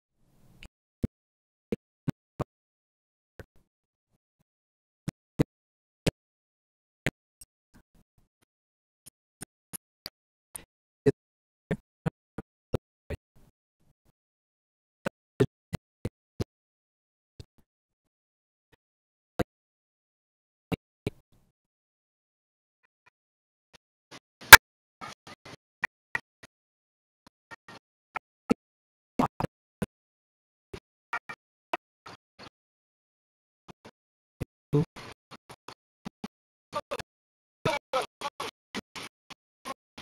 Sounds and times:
Speech: 0:37.7 - 0:38.6.

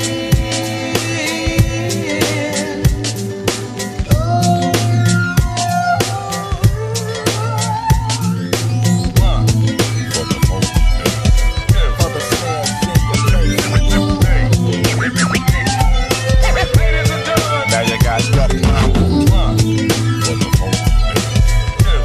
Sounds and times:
Rapping: 0:00.0 - 0:03.1, 0:11.8 - 0:20.9
Funk: 0:00.0 - 0:22.0
Hip hop music: 0:00.0 - 0:22.0.

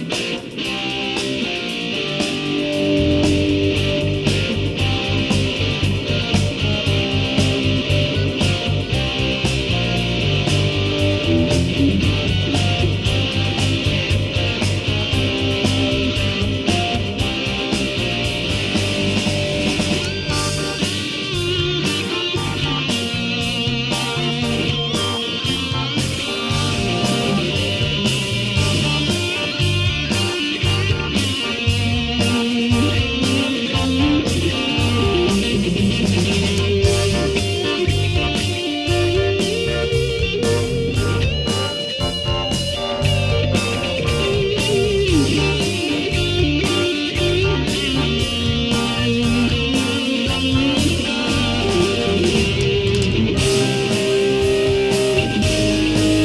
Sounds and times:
Music: 0:00.0 - 0:56.2.

